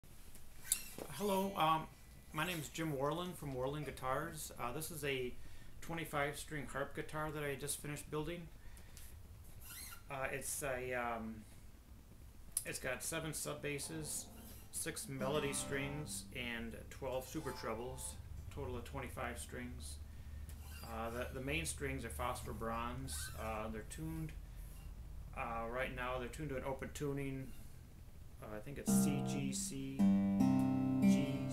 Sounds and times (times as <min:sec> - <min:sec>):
Speech: 0:01.1 - 0:08.5, 0:10.1 - 0:11.5, 0:12.6 - 0:20.0, 0:20.8 - 0:24.4, 0:25.3 - 0:27.6, 0:28.4 - 0:30.0.